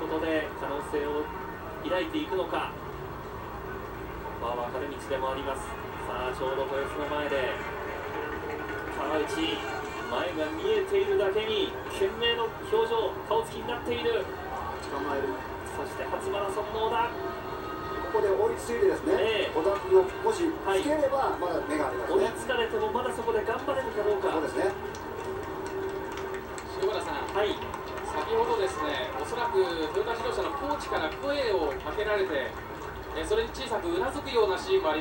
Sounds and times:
Television: 0:00.0 - 0:35.0
Run: 0:03.2 - 0:35.0.

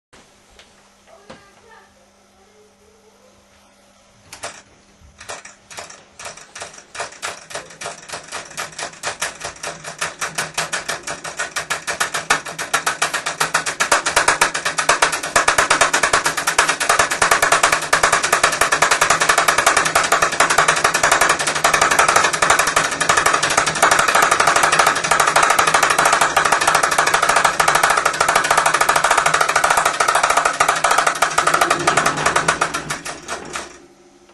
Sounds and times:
Speech: 0:01.1 - 0:03.5.

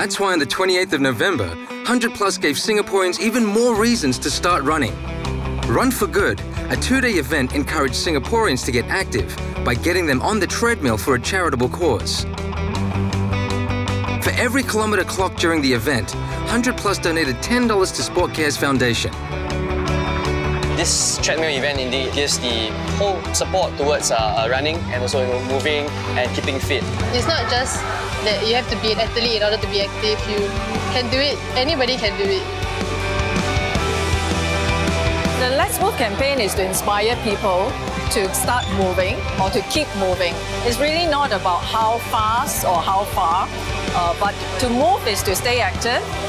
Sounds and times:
Music: 0:00.0 - 0:46.2.

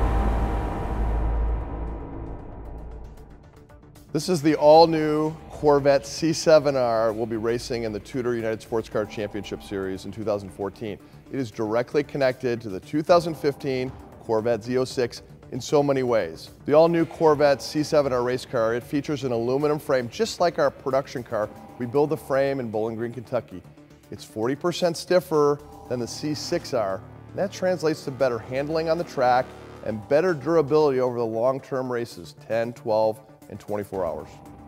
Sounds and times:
Music: 0:00.0 - 0:34.6
Speech: 0:04.2 - 0:23.6, 0:24.2 - 0:34.4.

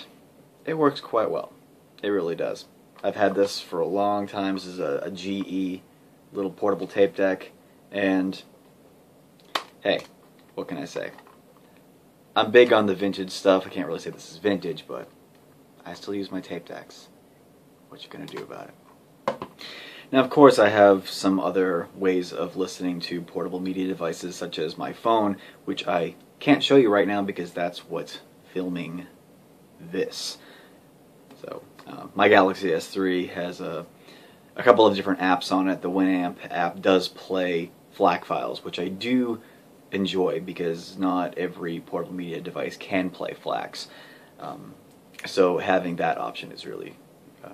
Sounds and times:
Speech: 0:00.0 - 0:08.5, 0:09.8 - 0:11.3, 0:12.4 - 0:15.2, 0:15.8 - 0:17.2, 0:17.9 - 0:18.8, 0:20.1 - 0:29.2, 0:29.8 - 0:30.4, 0:31.4 - 0:33.9, 0:34.6 - 0:47.5
Inside, small room: 0:00.0 - 0:47.5.

